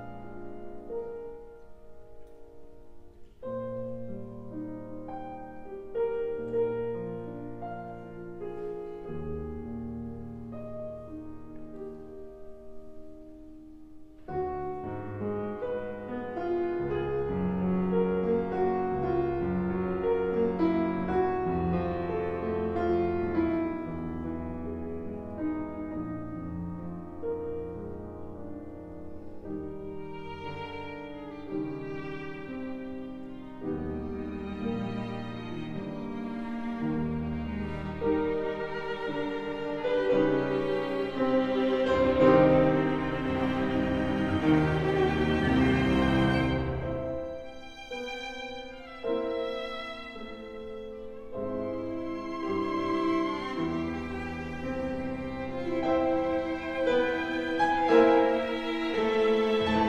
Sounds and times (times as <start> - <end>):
Piano: 0.0 - 59.8.